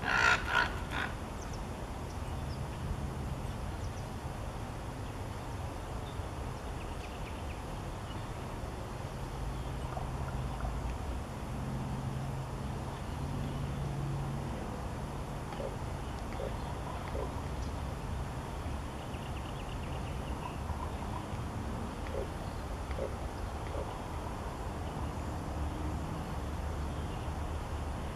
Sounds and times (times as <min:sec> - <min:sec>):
Bird: 0:15.5 - 0:17.8.